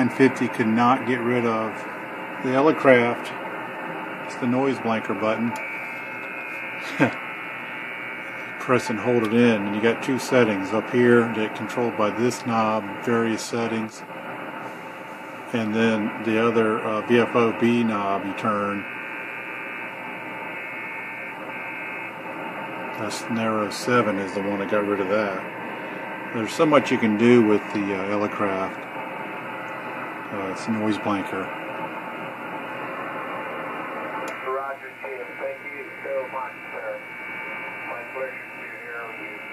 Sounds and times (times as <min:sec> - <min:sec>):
Speech: 0:00.0 - 0:01.8, 0:02.4 - 0:03.4, 0:04.3 - 0:05.6, 0:08.6 - 0:14.1, 0:15.5 - 0:18.9, 0:23.0 - 0:25.5, 0:26.3 - 0:28.8, 0:30.3 - 0:31.5, 0:34.4 - 0:37.1, 0:37.9 - 0:39.5.